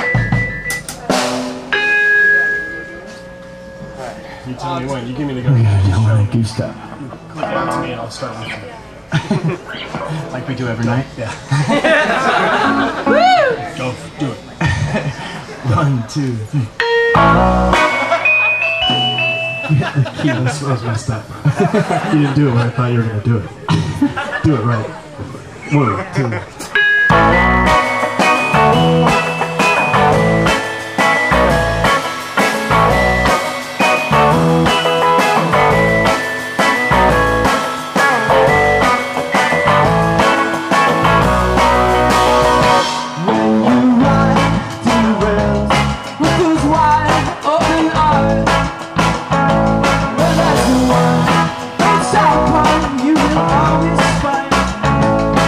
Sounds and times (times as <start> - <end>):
Music: 0.0 - 8.8, 12.0 - 13.6, 16.8 - 19.9, 26.8 - 55.4.